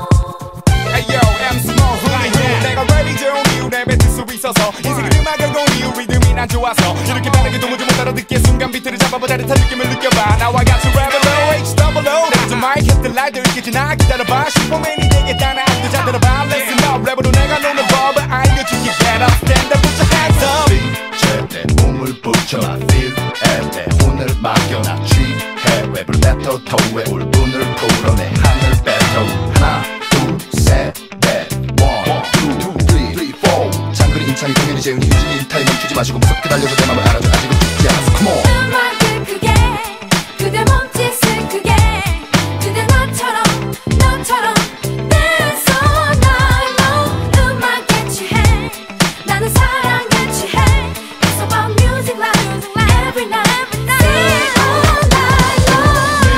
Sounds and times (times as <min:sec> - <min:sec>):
Tender music: 0:00.0 - 0:56.3.